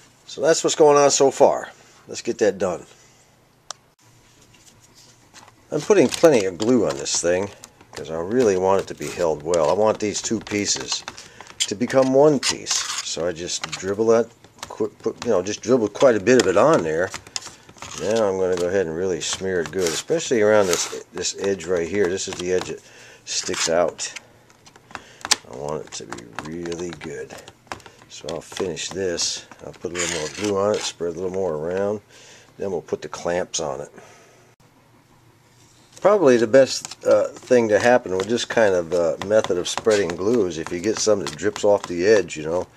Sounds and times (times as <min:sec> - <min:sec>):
Speech: 0:00.3 - 0:03.0, 0:05.7 - 0:17.2, 0:17.9 - 0:24.2, 0:25.4 - 0:27.5, 0:28.1 - 0:34.0, 0:36.0 - 0:42.7.